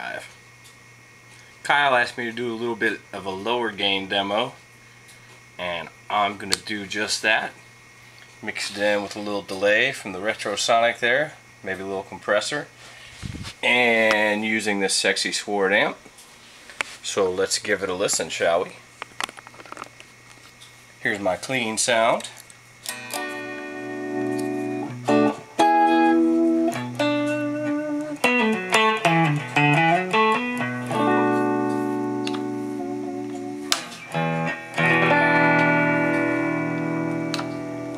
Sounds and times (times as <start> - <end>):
Speech: 0.0 - 0.4, 1.6 - 4.6, 5.6 - 7.6, 8.4 - 12.7, 13.6 - 16.1, 17.0 - 18.8, 21.0 - 22.4
Music: 22.9 - 37.9.